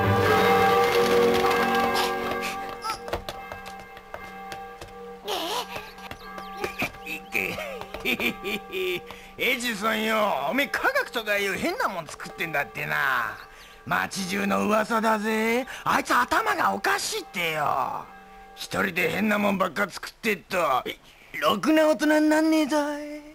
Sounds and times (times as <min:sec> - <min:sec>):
Speech: 0:09.4 - 0:22.1.